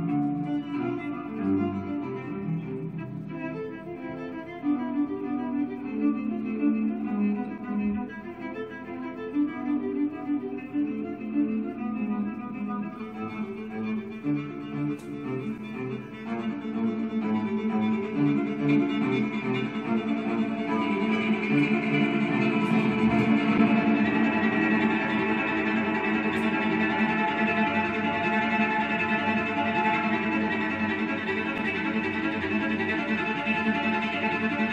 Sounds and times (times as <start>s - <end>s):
Cello: 0.0s - 34.7s.